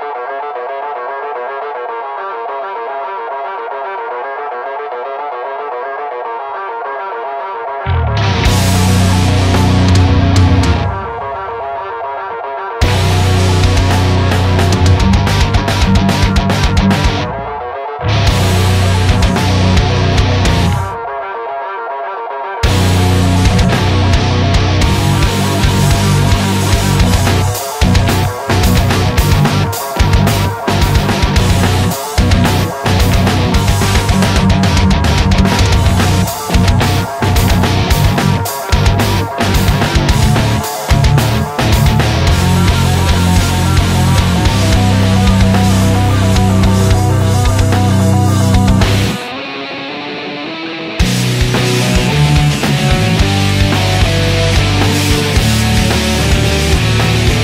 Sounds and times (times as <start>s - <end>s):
Music: 0.0s - 57.4s.